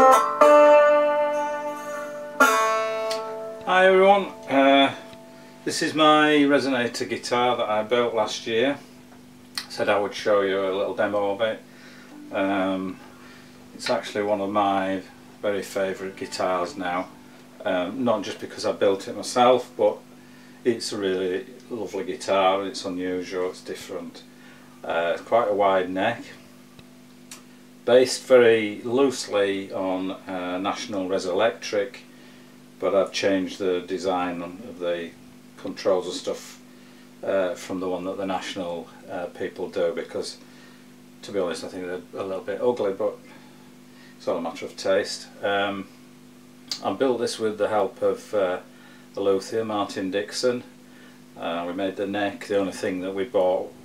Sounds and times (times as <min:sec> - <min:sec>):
Speech: 0:03.7 - 0:05.0, 0:05.6 - 0:08.9, 0:09.6 - 0:11.6, 0:12.3 - 0:13.1, 0:13.7 - 0:20.0, 0:20.6 - 0:26.5, 0:27.8 - 0:32.1, 0:32.8 - 0:36.6, 0:37.2 - 0:40.4, 0:41.2 - 0:43.5, 0:44.2 - 0:45.9, 0:46.7 - 0:50.8, 0:51.4 - 0:53.8.